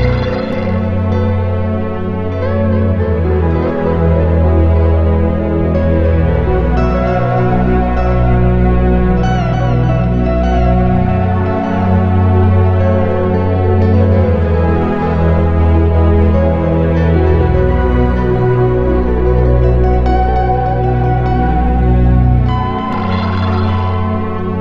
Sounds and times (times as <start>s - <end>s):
Soundtrack music: 0.0s - 24.6s.